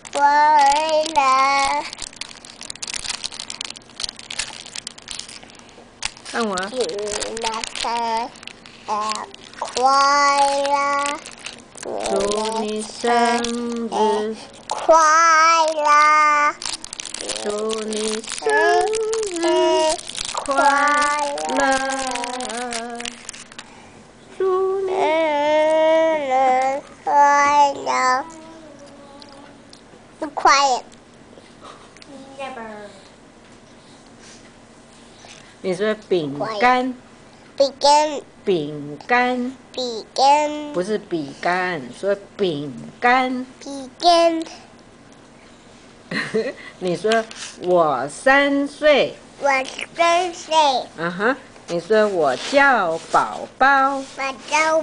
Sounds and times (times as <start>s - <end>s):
Child singing: 17.2s - 23.1s.